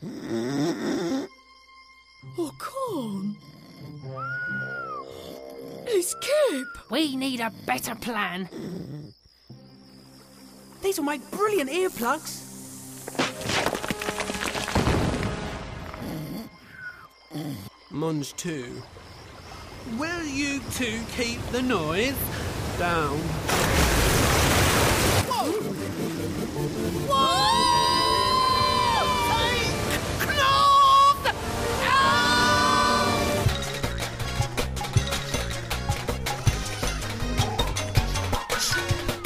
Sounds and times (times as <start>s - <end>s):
Music: 0.0s - 6.6s, 9.5s - 18.7s, 25.2s - 39.2s.